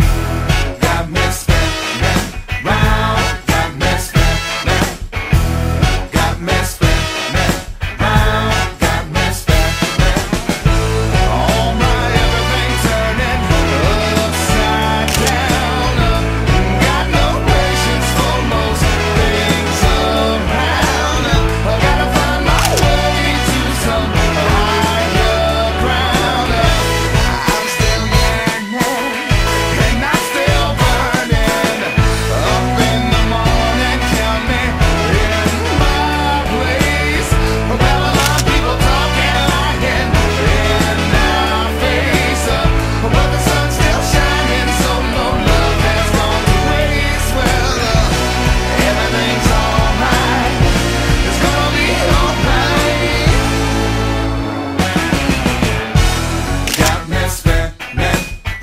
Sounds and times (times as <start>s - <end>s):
Music: 0.0s - 58.6s.